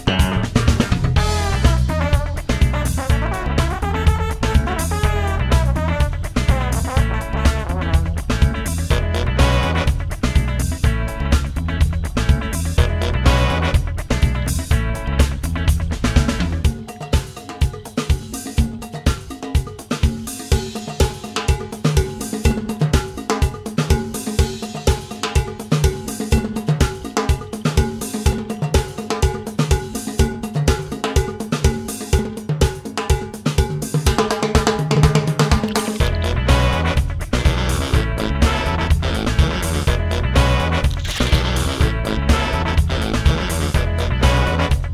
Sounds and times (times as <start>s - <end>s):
Music: 0.0s - 44.9s.